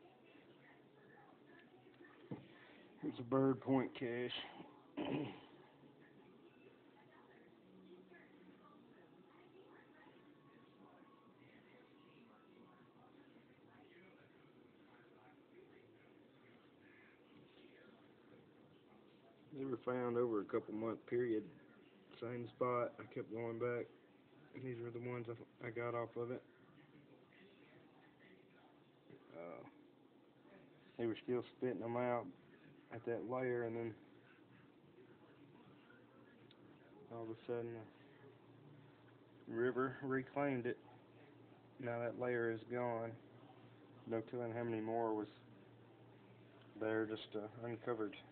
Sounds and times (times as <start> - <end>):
Speech: 0.0 - 29.8, 30.4 - 48.3.